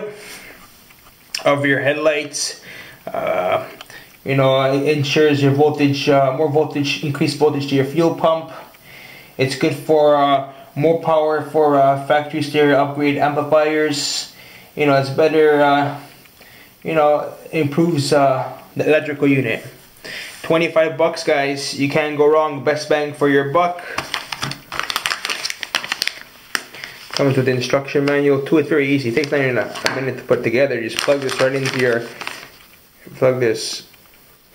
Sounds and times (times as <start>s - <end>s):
Speech: 0.0s - 0.2s, 1.4s - 8.7s, 9.4s - 16.1s, 16.8s - 19.8s, 20.4s - 24.0s, 27.2s - 32.2s, 33.0s - 33.9s.